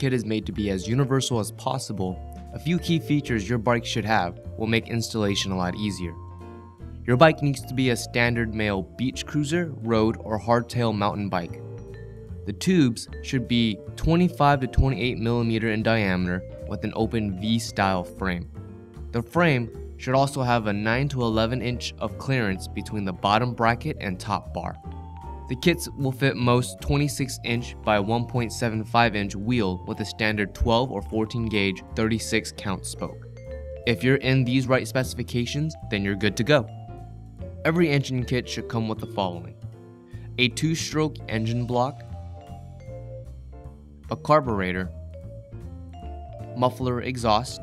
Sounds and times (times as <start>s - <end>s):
Speech: 0.0s - 6.2s, 7.1s - 11.6s, 12.5s - 18.5s, 19.2s - 24.8s, 25.5s - 33.2s, 33.9s - 36.7s, 37.6s - 39.5s, 40.4s - 42.0s, 44.1s - 45.0s, 46.6s - 47.6s
Music: 0.0s - 47.6s.